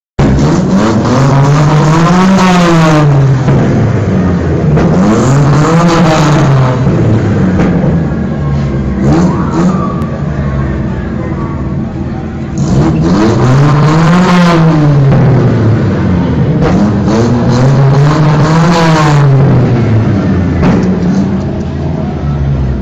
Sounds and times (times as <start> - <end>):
Race car, auto racing: 0.2 - 22.8.